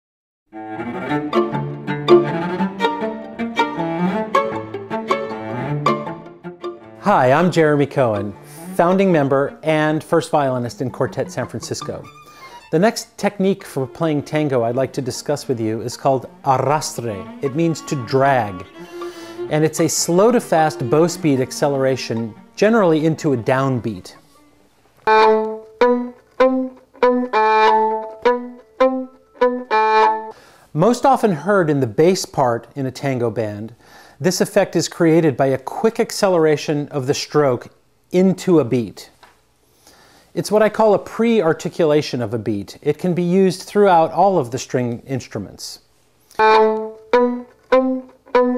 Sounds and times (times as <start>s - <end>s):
String section: 0.6s - 30.4s, 46.3s - 48.5s.